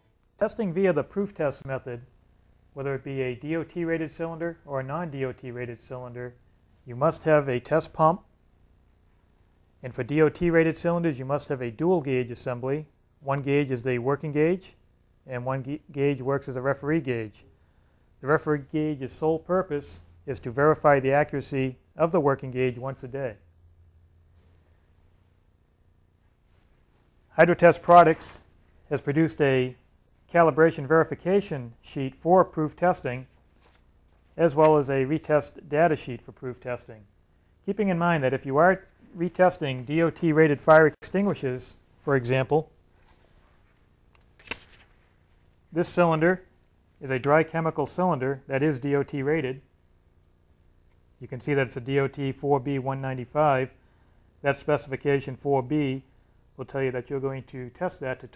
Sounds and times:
Speech: 0.4 - 2.1, 2.8 - 8.3, 9.8 - 17.5, 18.2 - 23.4, 27.3 - 33.3, 34.4 - 42.8, 45.7 - 49.7, 51.2 - 53.8, 54.4 - 58.3.

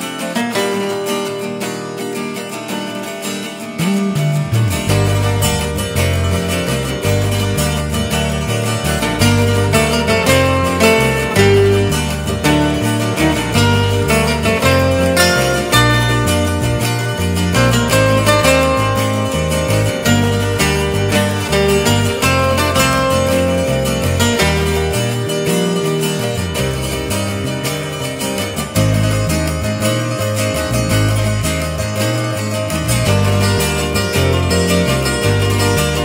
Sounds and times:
Music: 0.0 - 36.0.

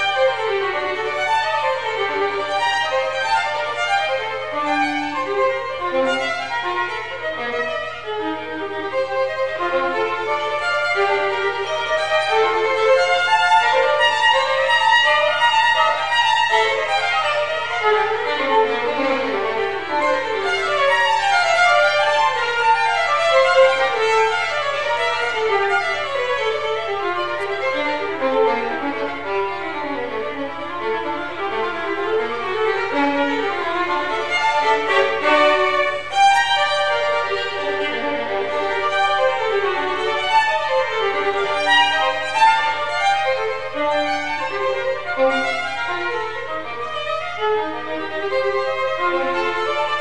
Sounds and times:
Violin, fiddle: 0.0 - 50.0.

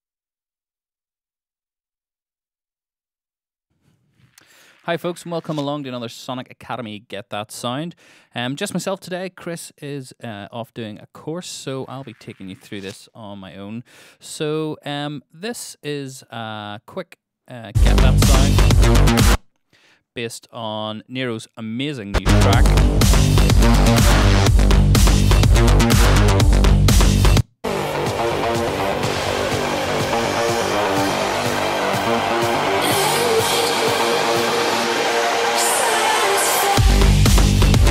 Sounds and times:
Music: 17.8 - 19.4, 22.2 - 37.9.

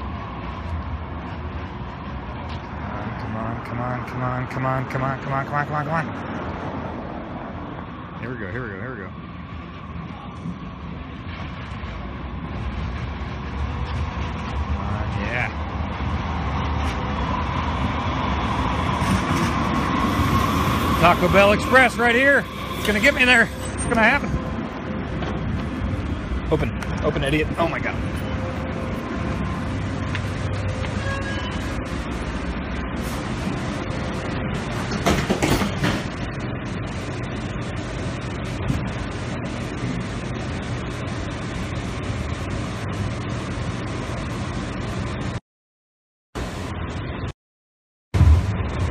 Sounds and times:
Speech: 14.8 - 15.6, 26.5 - 28.0.

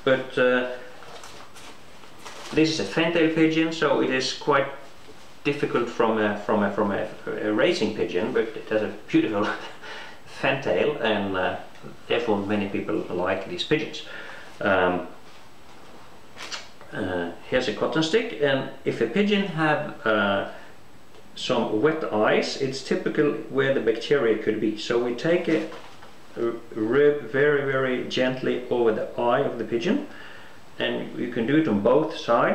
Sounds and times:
Speech: 0.0 - 0.9, 2.5 - 15.2, 16.5 - 20.6, 21.3 - 30.2, 30.8 - 32.5.

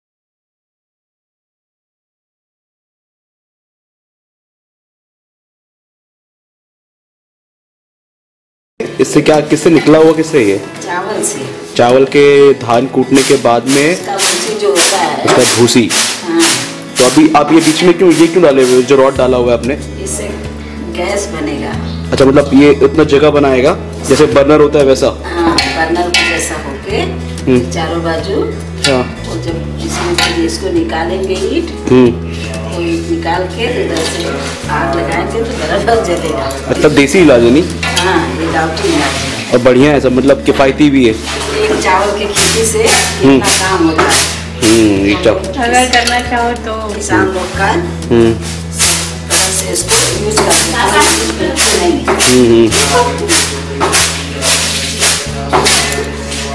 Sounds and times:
Music: 8.8 - 56.5.

